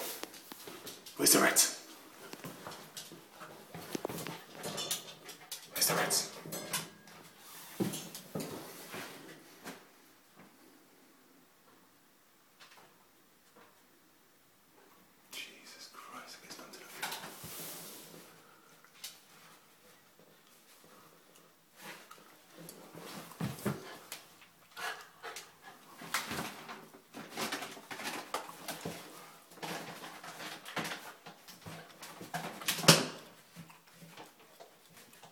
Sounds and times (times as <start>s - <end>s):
Speech: 1.2s - 1.8s, 5.7s - 6.4s, 15.3s - 17.1s.